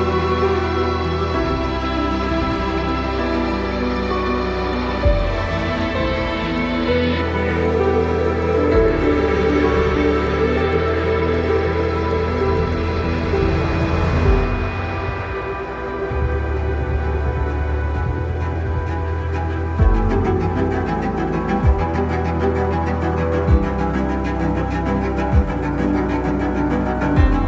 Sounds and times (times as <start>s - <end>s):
Music: 0.0s - 27.4s.